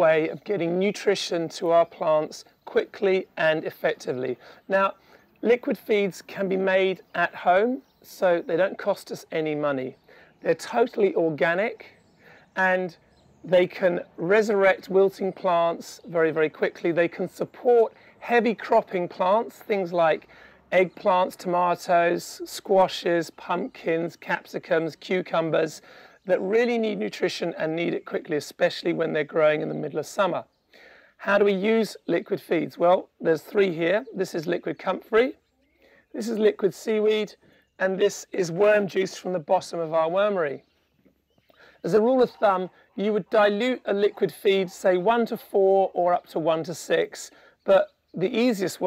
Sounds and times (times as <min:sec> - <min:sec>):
Speech: 0:00.0 - 0:12.0, 0:12.6 - 0:30.5, 0:31.2 - 0:35.4, 0:36.1 - 0:40.6, 0:41.8 - 0:48.8.